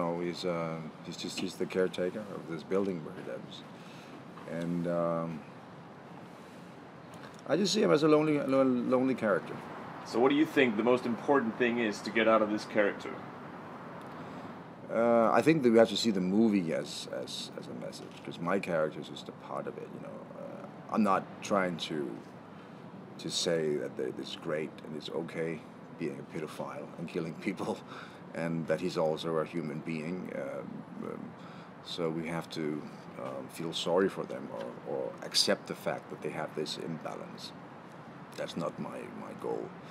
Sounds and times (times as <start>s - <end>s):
Speech: 0.0s - 3.7s, 4.4s - 5.5s, 7.4s - 13.2s, 14.9s - 22.3s, 23.2s - 37.6s, 38.4s - 39.8s.